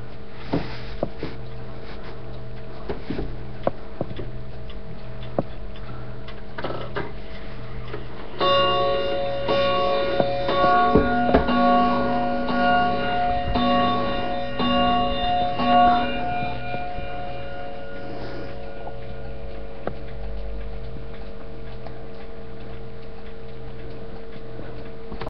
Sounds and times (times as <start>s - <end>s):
Tick-tock: 18.6s - 25.2s.